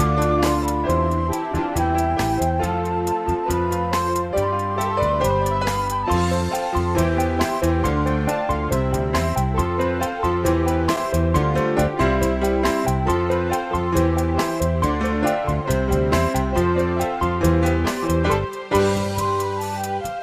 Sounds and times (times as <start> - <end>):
Music: 0.0 - 20.2.